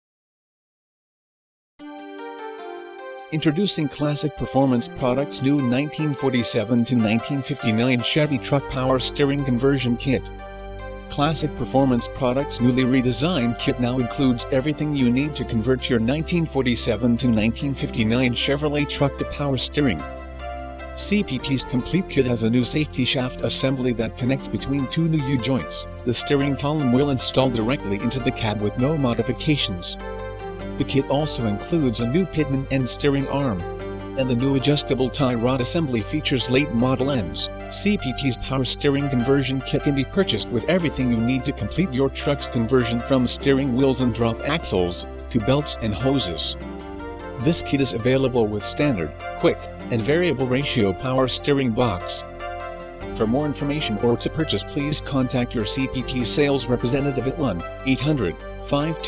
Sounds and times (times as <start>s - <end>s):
Music: 1.8s - 59.0s
Speech: 3.4s - 10.3s, 11.2s - 20.0s, 21.0s - 30.0s, 30.8s - 46.6s, 47.4s - 52.2s, 53.2s - 59.0s.